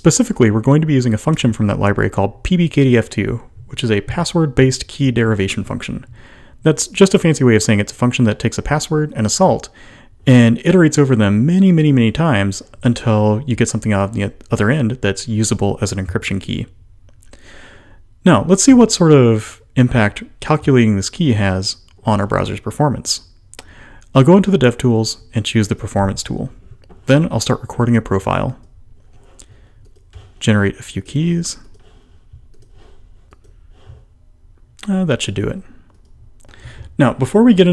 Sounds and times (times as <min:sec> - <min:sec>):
Speech: 0:00.0 - 0:16.8, 0:18.2 - 0:23.3, 0:24.1 - 0:28.7, 0:30.4 - 0:31.8, 0:34.8 - 0:35.8, 0:37.0 - 0:37.7.